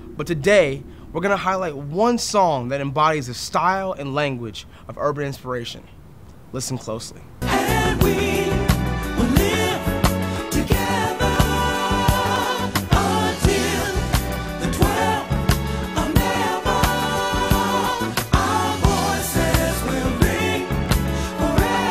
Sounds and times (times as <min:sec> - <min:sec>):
Soul music: 0:07.4 - 0:21.9.